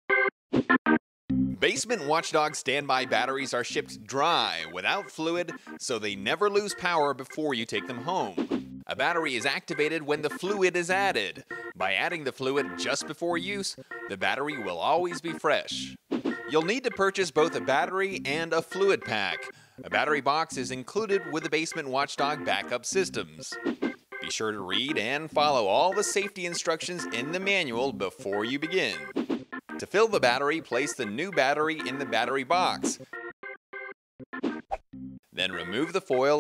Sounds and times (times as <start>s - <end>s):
Music: 0.9s - 33.3s, 35.0s - 36.4s
Speech: 1.6s - 23.6s, 24.2s - 29.1s, 29.8s - 33.0s, 35.4s - 36.4s.